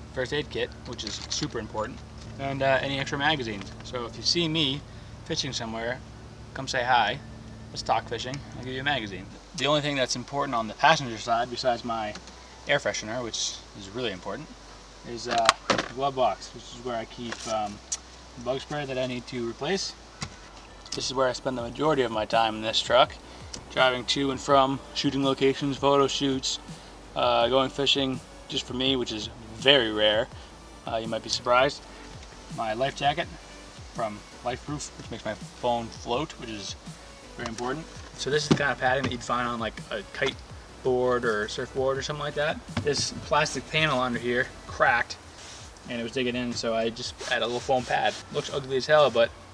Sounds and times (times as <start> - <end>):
Speech: 0.1 - 6.0, 6.6 - 17.8, 18.4 - 20.0, 20.9 - 26.6, 27.2 - 30.3, 30.9 - 31.8, 32.5 - 33.4, 34.0 - 36.8, 37.4 - 45.2, 45.8 - 49.3.